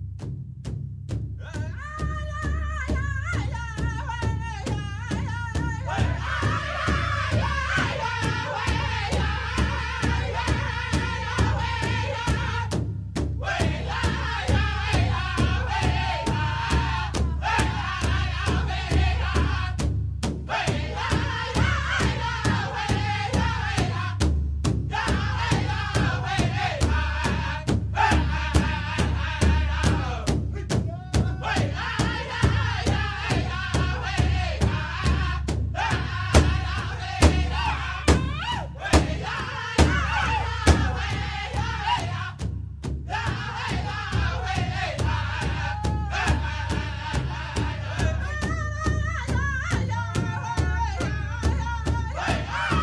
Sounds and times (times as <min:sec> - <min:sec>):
Music: 0:00.0 - 0:52.8.